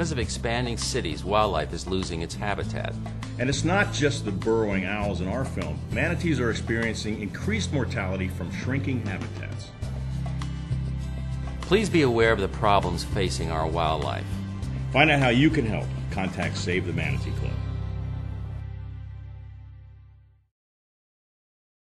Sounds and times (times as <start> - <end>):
Speech: 0.0 - 9.7, 11.7 - 14.3, 14.9 - 17.6
Music: 0.0 - 20.5.